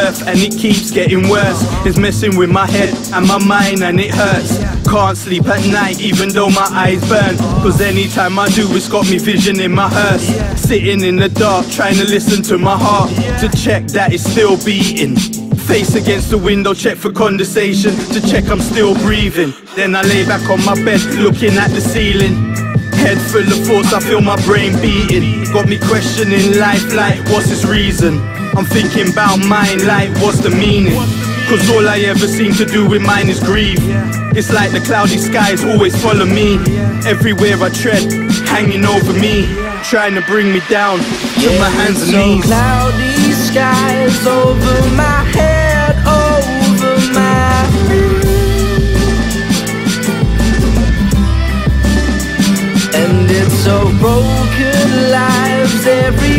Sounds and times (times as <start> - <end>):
Rapping: 0.0 - 49.3, 52.9 - 56.3.